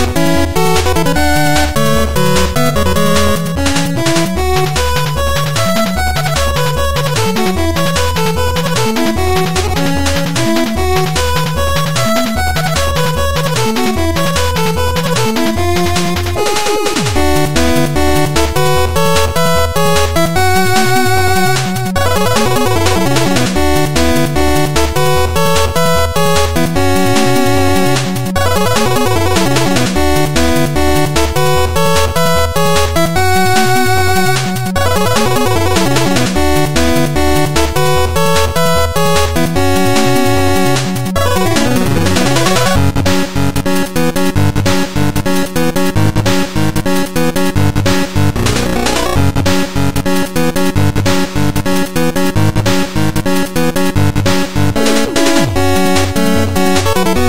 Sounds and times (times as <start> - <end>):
Music: 0.0 - 57.2.